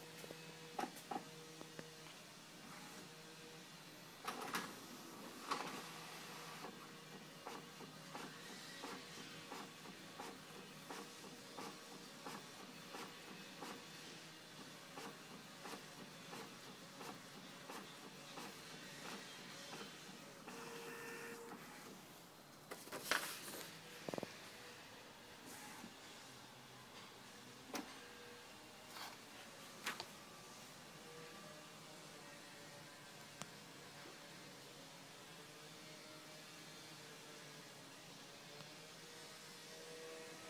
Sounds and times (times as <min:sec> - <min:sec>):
Printer: 0:00.0 - 0:40.4.